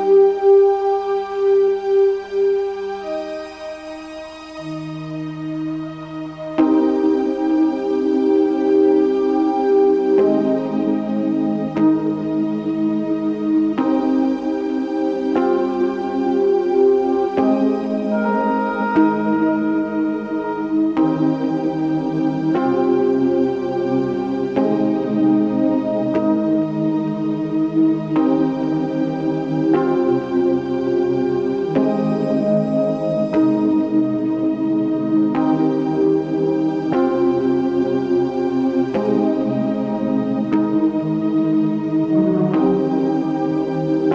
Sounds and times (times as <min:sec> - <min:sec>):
Music: 0:00.0 - 0:44.1.